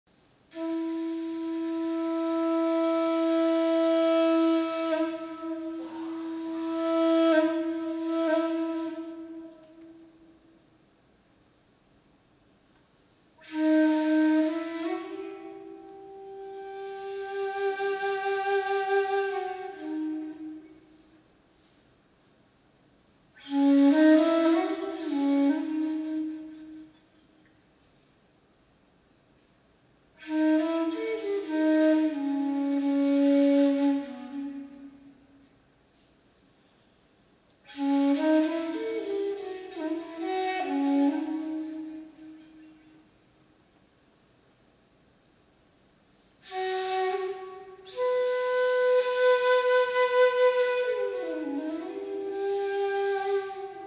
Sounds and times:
Inside, large room or hall: 0.1s - 53.8s
Wind instrument, woodwind instrument: 0.5s - 10.6s, 13.4s - 21.8s, 23.3s - 27.4s, 30.1s - 36.1s, 37.5s - 43.2s, 46.4s - 53.8s.

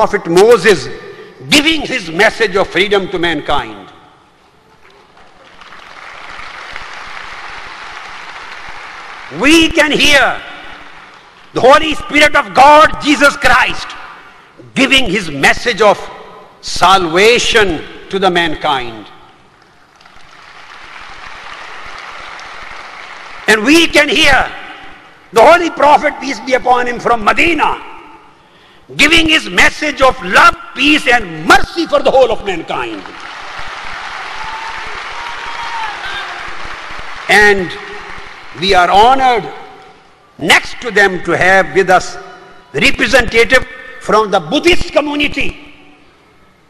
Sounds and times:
Male speech, man speaking: 0.0s - 4.0s, 9.4s - 10.5s, 11.6s - 14.0s, 14.7s - 19.2s, 23.5s - 24.6s, 25.4s - 28.0s, 28.9s - 33.1s, 37.3s - 37.8s, 38.6s - 39.7s, 40.4s - 45.6s
Narration, monologue: 0.0s - 4.4s, 7.2s - 20.2s, 22.4s - 33.6s, 36.9s - 46.6s.

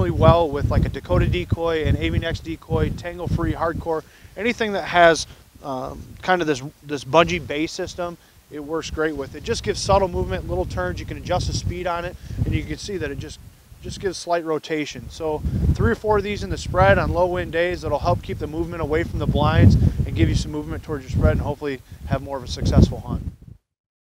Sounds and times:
Speech: 0.0s - 23.2s.

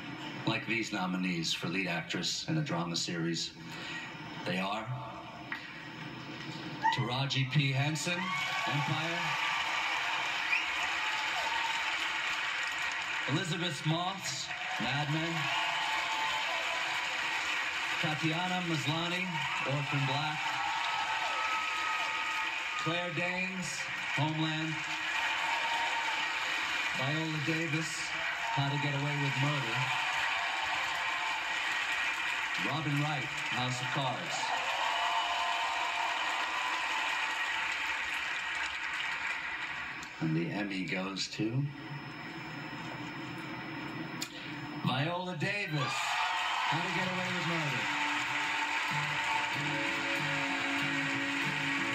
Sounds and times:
Male speech, man speaking: 0.4s - 3.6s, 4.4s - 5.3s, 6.8s - 9.4s, 13.3s - 15.5s, 18.0s - 20.5s, 22.8s - 24.8s, 27.0s - 29.9s, 32.6s - 34.5s, 40.2s - 41.8s, 44.8s - 46.1s, 46.7s - 47.9s.

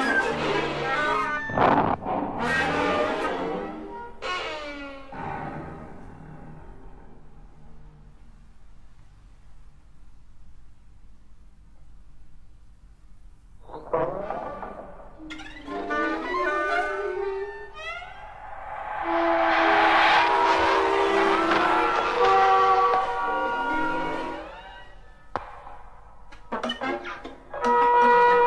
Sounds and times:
Music: 0.0s - 8.4s, 13.7s - 18.2s, 26.4s - 28.4s.

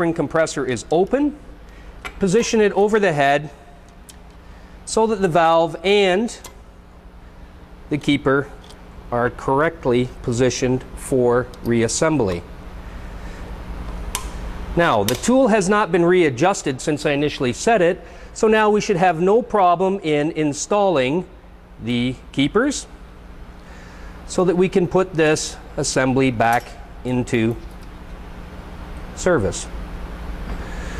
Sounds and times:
Speech: 0.0s - 1.4s, 2.2s - 3.6s, 4.9s - 6.4s, 7.9s - 12.5s, 14.8s - 22.9s, 24.3s - 27.6s, 29.2s - 29.8s.

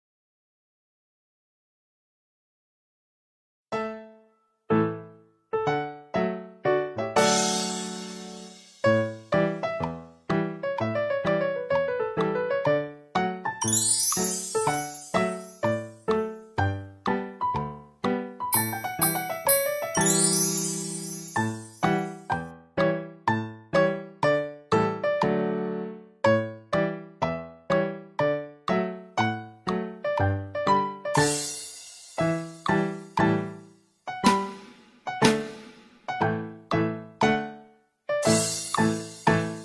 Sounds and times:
Music: 3.7s - 39.6s.

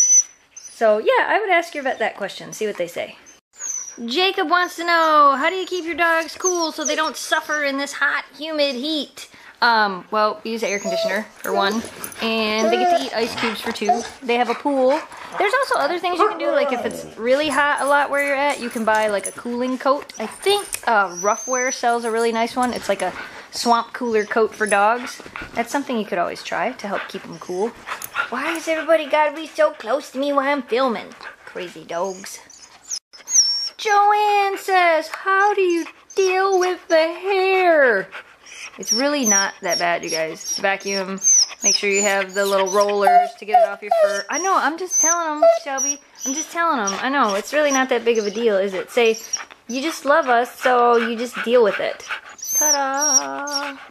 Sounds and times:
Speech: 0.8s - 3.2s, 4.0s - 32.5s, 33.8s - 38.2s, 38.8s - 53.8s
Dog: 10.7s - 22.7s, 37.9s - 53.9s.

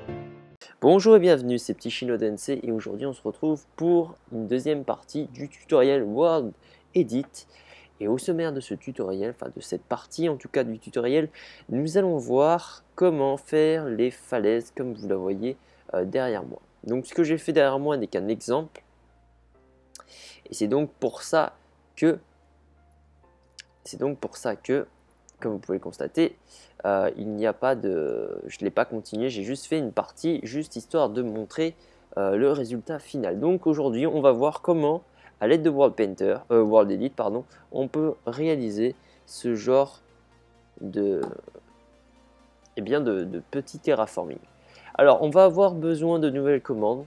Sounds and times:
Speech: 0.6s - 18.8s, 20.4s - 22.2s, 23.8s - 40.0s, 40.8s - 41.6s, 42.8s - 47.0s.

